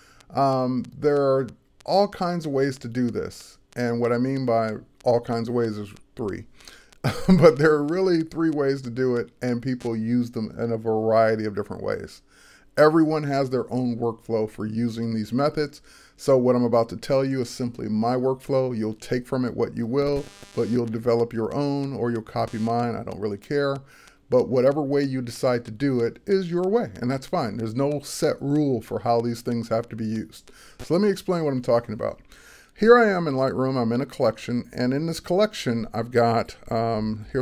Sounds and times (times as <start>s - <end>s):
Speech: 0.3s - 6.5s, 7.1s - 12.2s, 12.8s - 32.2s, 32.8s - 37.4s.